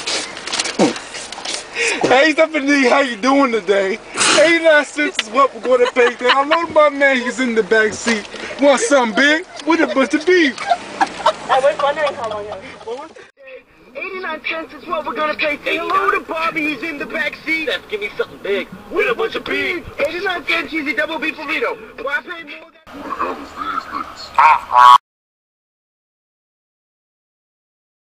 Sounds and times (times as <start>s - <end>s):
Speech: 11.5s - 24.7s.